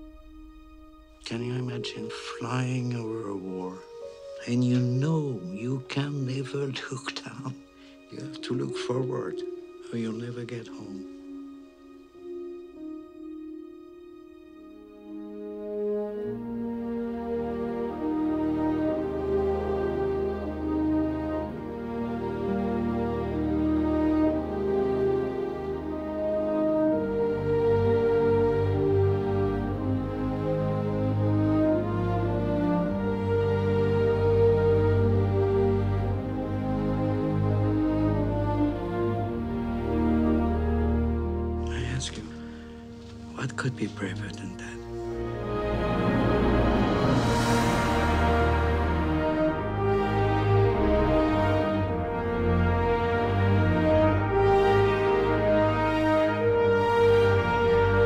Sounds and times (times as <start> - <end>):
Music: 0.0 - 58.0.